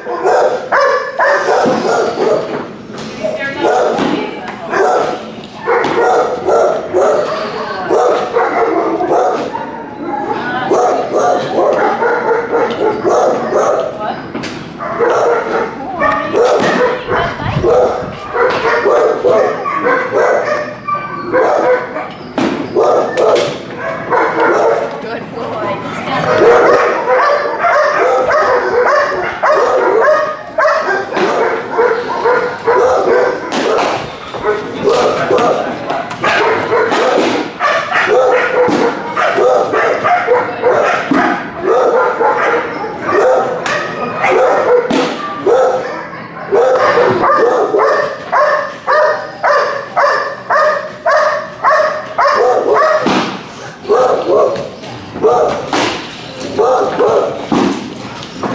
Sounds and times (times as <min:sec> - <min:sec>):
Speech: 0:03.2 - 0:05.6, 0:10.2 - 0:12.1, 0:15.6 - 0:18.1, 0:24.7 - 0:27.0
Whimper (dog): 0:09.5 - 0:10.6, 0:19.3 - 0:23.4.